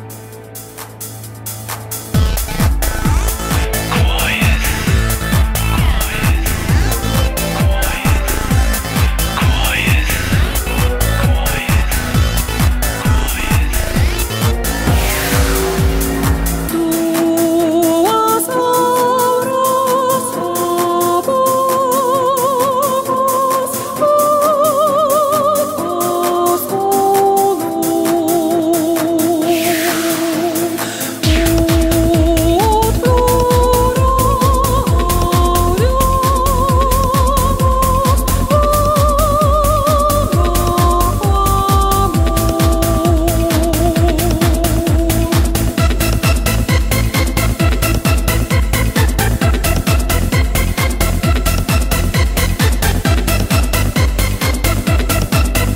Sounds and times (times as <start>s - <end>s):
Techno: 0.0s - 55.7s
Opera: 3.6s - 45.8s.